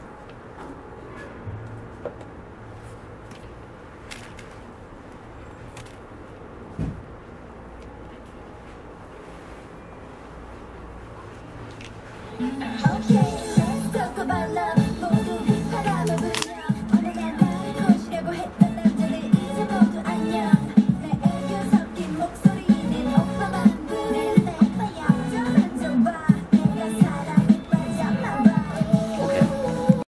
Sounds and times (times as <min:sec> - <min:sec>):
Music: 0:12.3 - 0:30.1.